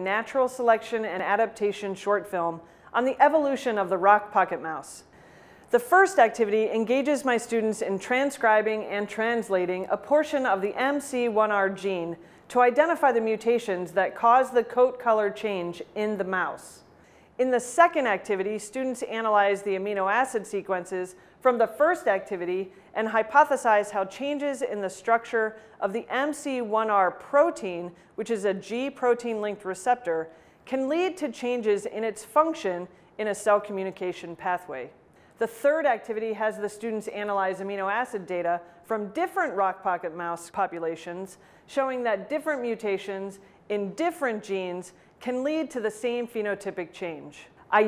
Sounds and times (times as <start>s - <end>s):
Speech: 0.0s - 5.0s, 5.7s - 16.8s, 17.4s - 47.8s.